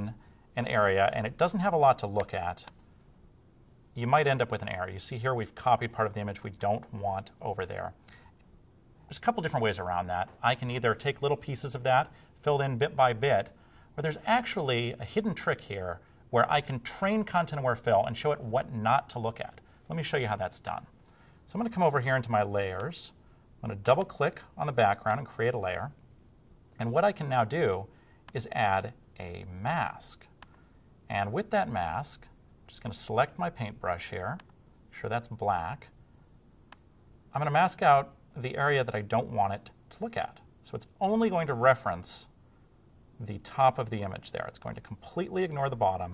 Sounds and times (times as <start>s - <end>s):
Speech: 0.0s - 2.8s, 4.0s - 8.0s, 9.1s - 20.9s, 21.5s - 26.0s, 26.8s - 30.3s, 31.1s - 36.0s, 37.3s - 42.4s, 43.2s - 46.1s.